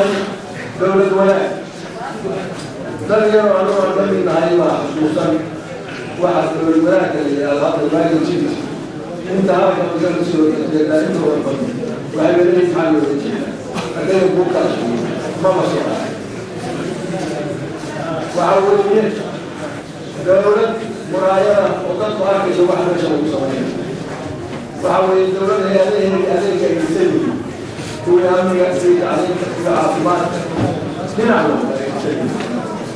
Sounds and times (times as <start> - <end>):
Male speech, man speaking: 0.0 - 16.2, 17.2 - 19.4, 20.1 - 23.9, 24.8 - 32.4
Narration, monologue: 0.0 - 32.9.